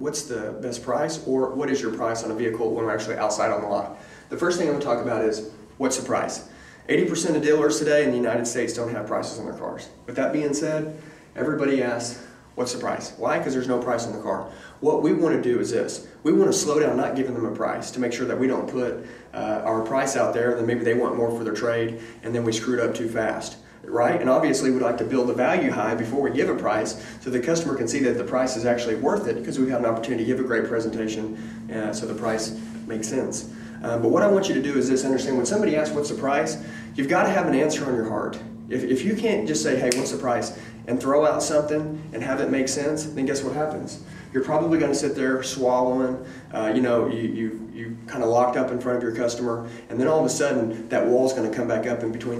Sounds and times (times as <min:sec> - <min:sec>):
Speech: 0:00.0 - 0:52.3.